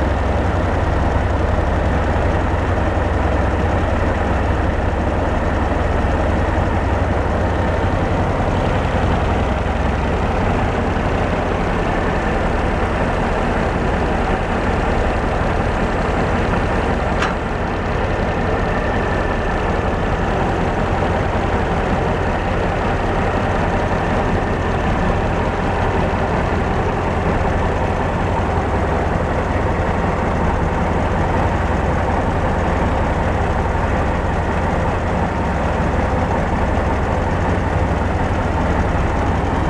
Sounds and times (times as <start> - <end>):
Vehicle: 0.0 - 39.6.